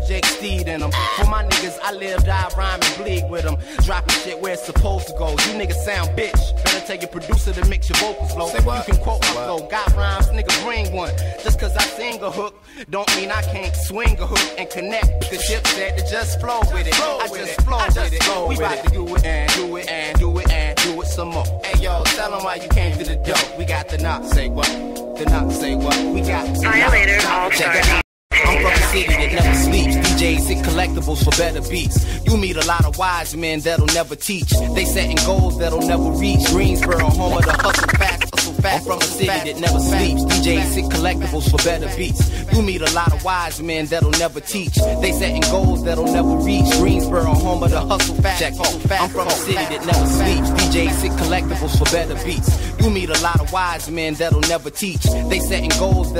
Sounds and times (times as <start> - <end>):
Hip hop music: 0.0 - 56.1.